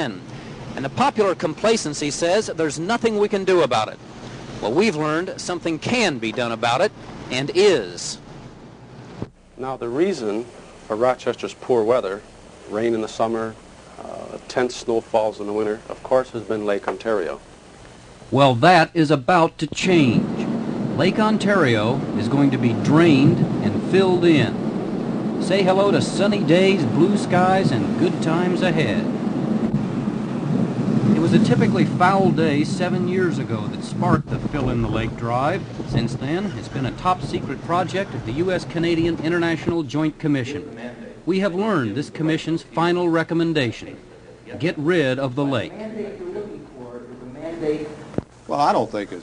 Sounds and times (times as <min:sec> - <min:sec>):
Speech: 0:00.8 - 0:04.0, 0:04.6 - 0:08.2, 0:09.6 - 0:17.4, 0:18.3 - 0:24.6, 0:25.4 - 0:29.1, 0:31.2 - 0:49.2.